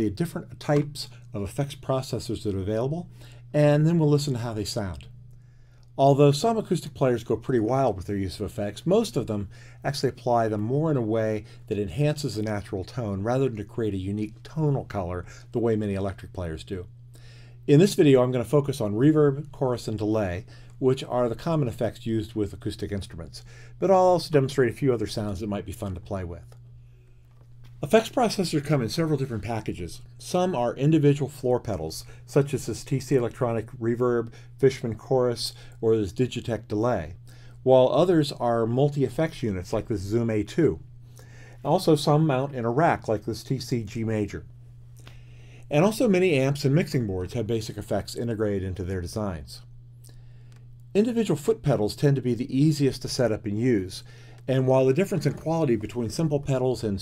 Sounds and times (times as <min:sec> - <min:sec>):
Speech: 0:00.0 - 0:05.2, 0:06.0 - 0:16.9, 0:17.7 - 0:26.6, 0:27.8 - 0:40.9, 0:41.6 - 0:44.5, 0:45.7 - 0:49.7, 0:50.9 - 0:57.0.